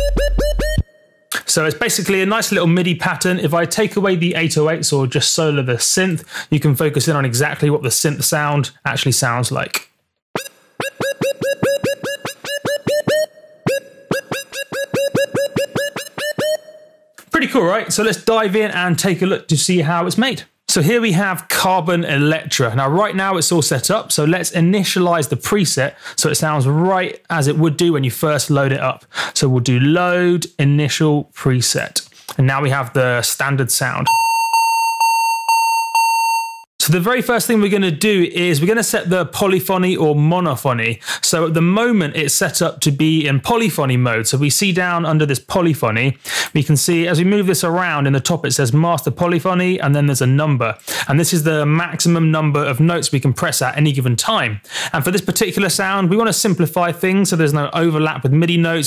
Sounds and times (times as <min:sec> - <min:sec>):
Speech: 0:01.4 - 0:09.9, 0:17.2 - 0:34.1, 0:36.8 - 0:58.8.